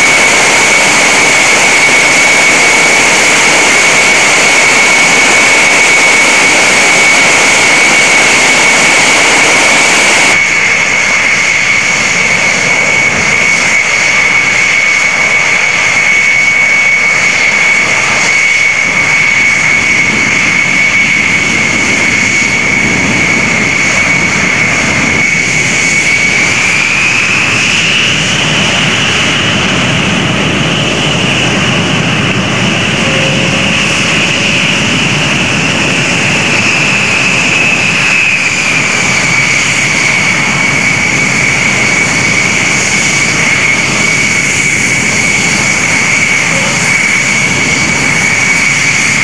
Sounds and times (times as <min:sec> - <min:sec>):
Aircraft engine: 0:00.0 - 0:49.2.